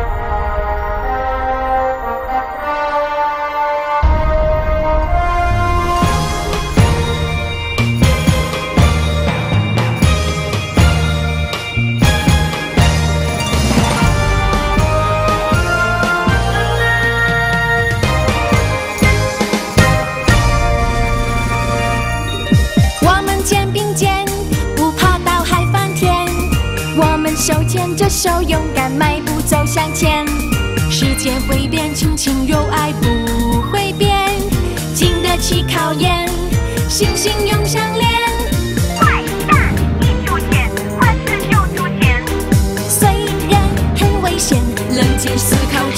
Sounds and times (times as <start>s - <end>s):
Music: 0.0s - 45.9s.